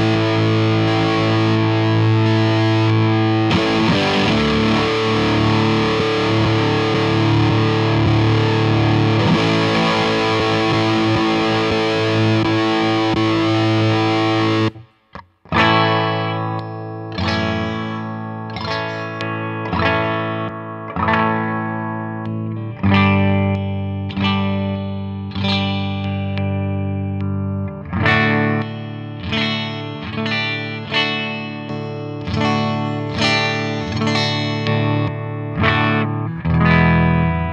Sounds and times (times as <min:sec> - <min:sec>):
Distortion: 0:00.0 - 0:37.5
Effects unit: 0:00.0 - 0:37.5
Electric guitar: 0:00.0 - 0:37.5.